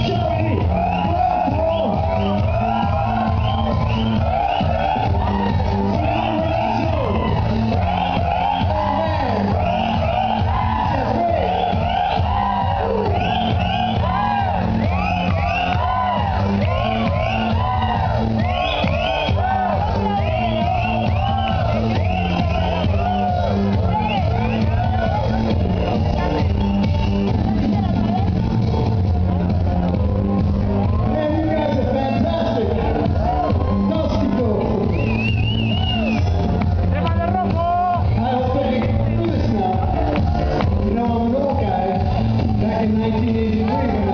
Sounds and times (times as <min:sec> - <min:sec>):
Dance music: 0:00.0 - 0:44.1.